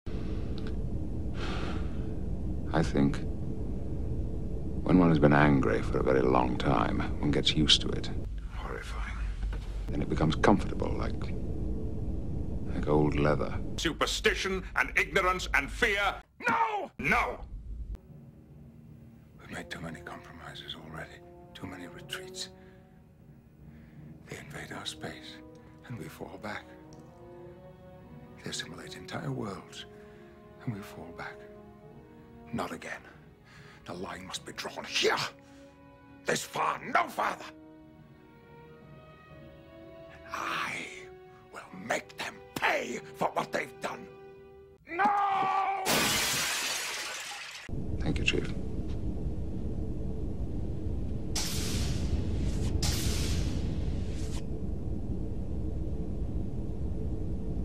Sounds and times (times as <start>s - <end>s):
Narration, monologue: 0.6s - 11.7s, 12.4s - 45.1s, 47.6s - 49.7s
Male speech, man speaking: 2.7s - 3.3s, 4.8s - 9.3s, 9.9s - 11.3s, 12.7s - 17.4s, 19.4s - 22.5s, 24.2s - 26.8s, 28.4s - 29.9s, 30.6s - 31.4s, 32.5s - 33.2s, 33.9s - 35.4s, 36.3s - 37.6s, 40.2s - 44.1s, 48.0s - 48.6s
Music: 17.4s - 45.0s.